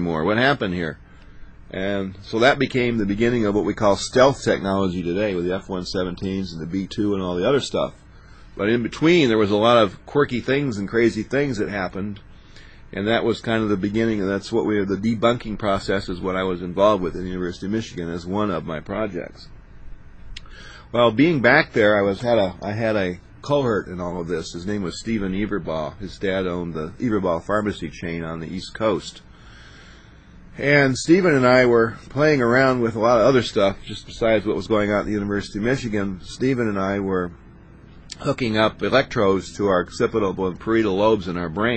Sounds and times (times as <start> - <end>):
Speech: 0.0 - 1.0, 1.7 - 12.3, 12.9 - 19.5, 20.8 - 29.3, 30.6 - 37.4, 38.1 - 41.7.